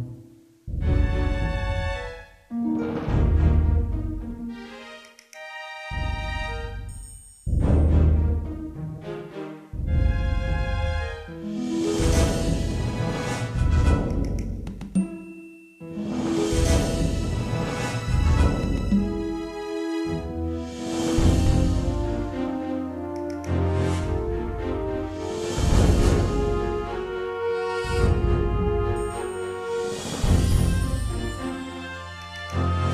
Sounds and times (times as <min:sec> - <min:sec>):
Video game music: 0:00.0 - 0:32.9.